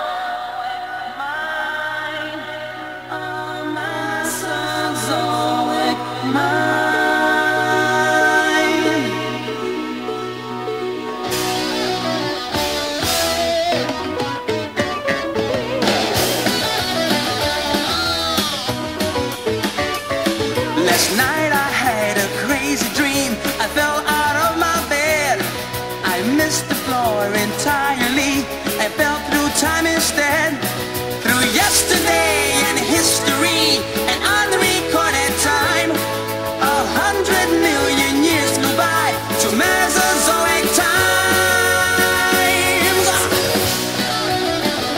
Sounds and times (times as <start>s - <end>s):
Music: 0.0s - 44.9s.